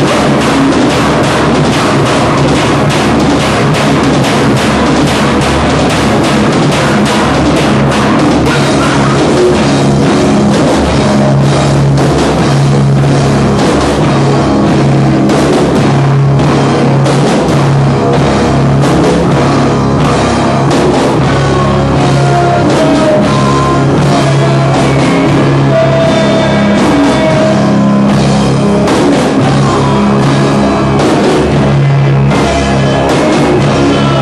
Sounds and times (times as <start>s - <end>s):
Drum kit: 0.0s - 34.2s
Rock music: 0.0s - 34.2s.